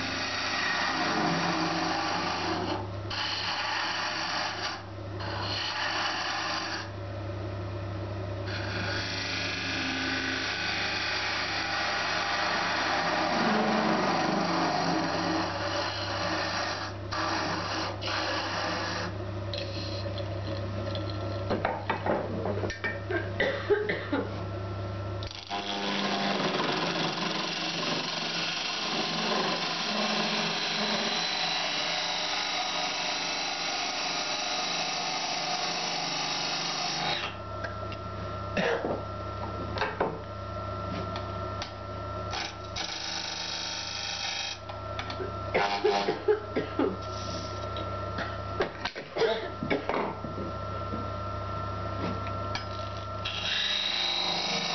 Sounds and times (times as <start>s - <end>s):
Power tool: 0.0s - 7.0s, 8.4s - 20.0s, 25.2s - 37.4s, 41.6s - 46.3s, 52.5s - 54.7s.